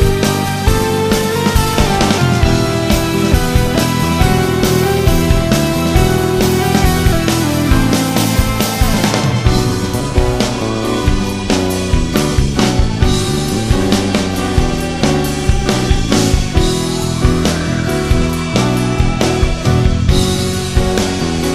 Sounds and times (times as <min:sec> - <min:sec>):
Rhythm and blues: 0:00.0 - 0:21.5.